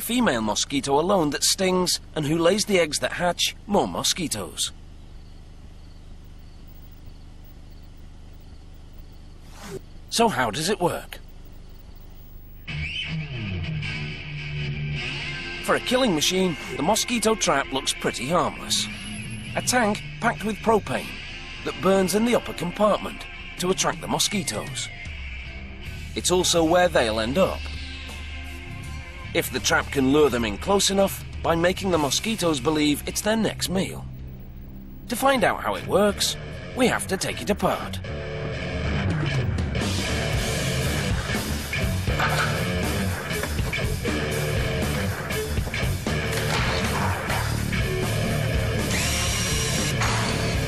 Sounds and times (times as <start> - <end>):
Speech: 0.0 - 4.8, 10.1 - 11.2, 15.7 - 18.9, 19.6 - 24.9, 26.2 - 27.7, 29.4 - 34.1, 35.1 - 38.0
Music: 12.6 - 50.6.